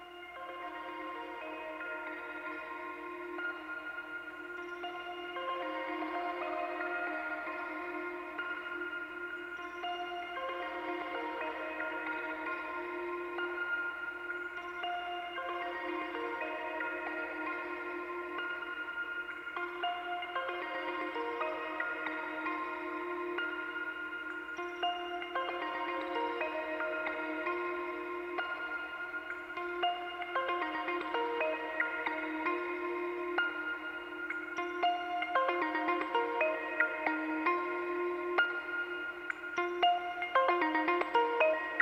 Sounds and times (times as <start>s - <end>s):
Electronica: 0.0s - 41.8s.